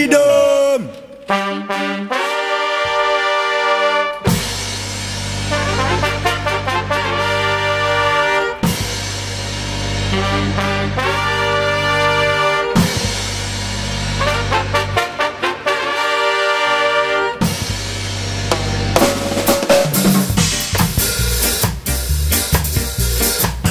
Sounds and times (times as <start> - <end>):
Drum kit: 4.2 - 11.8, 12.6 - 15.0, 17.4 - 23.7
Bass drum: 17.5 - 23.7
Rimshot: 18.5 - 21.7.